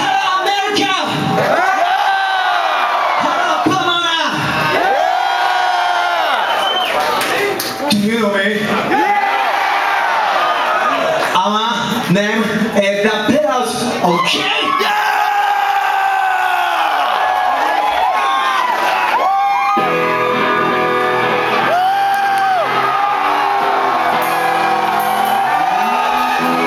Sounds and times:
Speech: 0:00.0 - 0:01.3, 0:03.2 - 0:04.5, 0:07.2 - 0:08.8, 0:11.4 - 0:14.9.

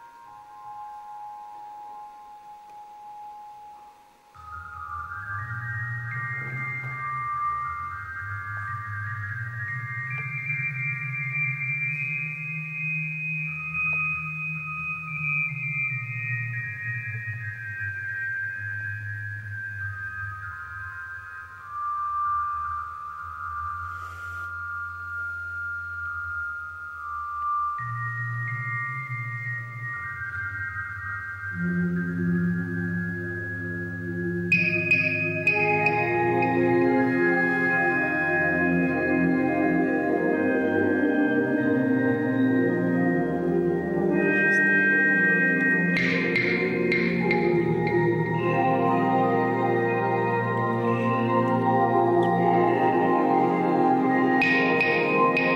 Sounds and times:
Musical instrument: 0:00.0 - 0:55.5.

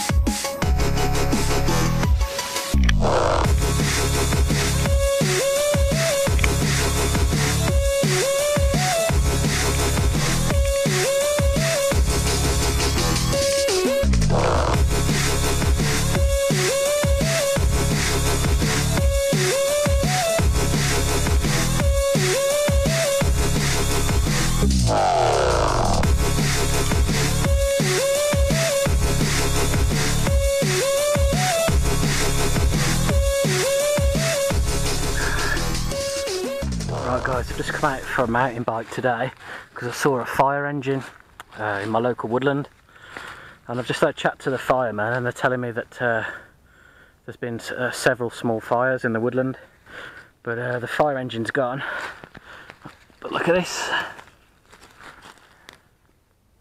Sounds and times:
Music: 0:00.0 - 0:39.0.

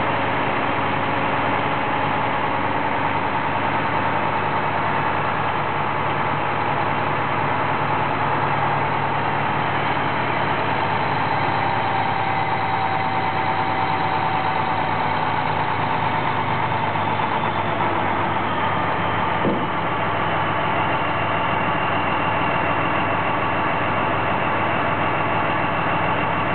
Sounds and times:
Truck: 0:00.0 - 0:26.5.

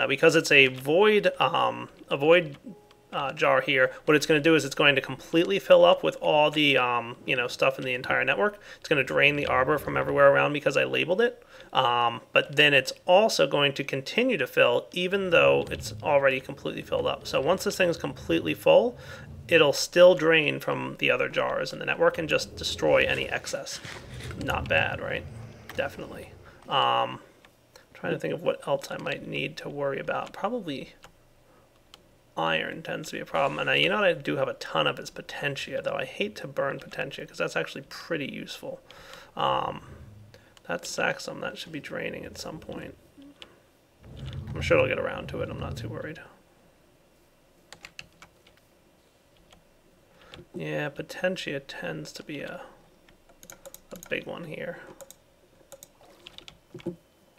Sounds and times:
Speech: 0:00.0 - 0:27.3, 0:28.0 - 0:31.0, 0:32.4 - 0:38.8, 0:39.4 - 0:40.0, 0:40.6 - 0:43.3, 0:44.2 - 0:46.4, 0:50.6 - 0:52.8, 0:54.0 - 0:54.9
Computer keyboard: 0:47.7 - 0:48.6, 0:53.3 - 0:54.2, 0:54.9 - 0:57.0.

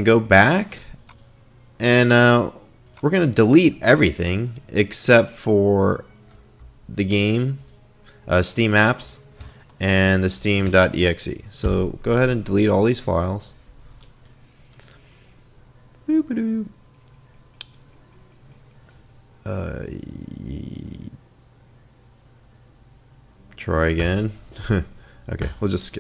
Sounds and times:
Speech: 0:01.8 - 0:06.1, 0:09.8 - 0:13.6, 0:16.1 - 0:16.7, 0:19.4 - 0:21.2, 0:23.6 - 0:26.0.

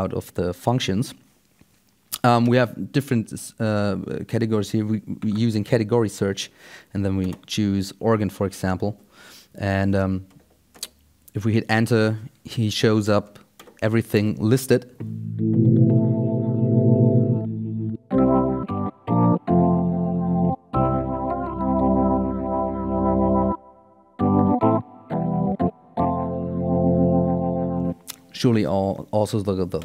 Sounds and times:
Speech: 0:00.0 - 0:01.2, 0:02.2 - 0:09.0, 0:09.6 - 0:10.3, 0:11.3 - 0:15.0, 0:28.3 - 0:29.8
Synthesizer: 0:15.0 - 0:28.0
Electric piano: 0:15.0 - 0:28.2.

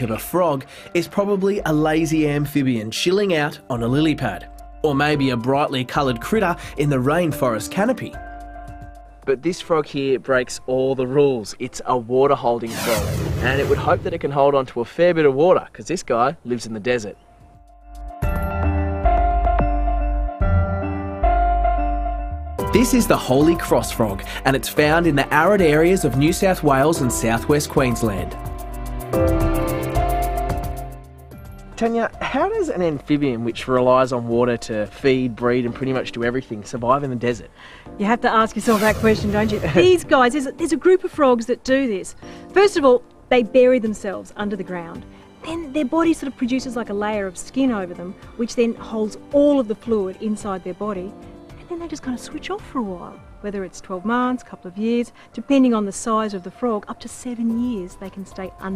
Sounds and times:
Speech: 0:00.0 - 0:08.2, 0:09.3 - 0:17.2, 0:22.8 - 0:28.4, 0:31.8 - 0:51.1, 0:51.7 - 0:58.7
Music: 0:00.0 - 0:58.7.

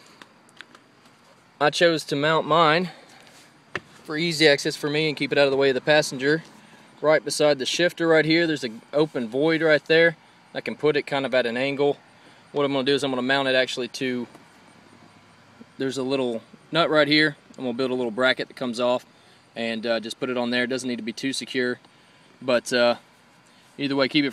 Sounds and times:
Speech: 0:01.6 - 0:03.0, 0:04.1 - 0:12.0, 0:12.6 - 0:14.3, 0:15.8 - 0:21.8, 0:22.4 - 0:23.0, 0:23.8 - 0:24.3.

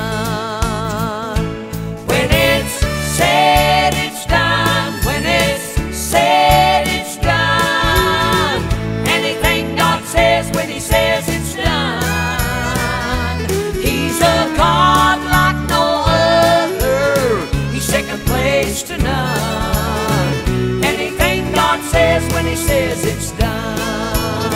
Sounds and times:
Christmas music: 0:01.4 - 0:24.5.

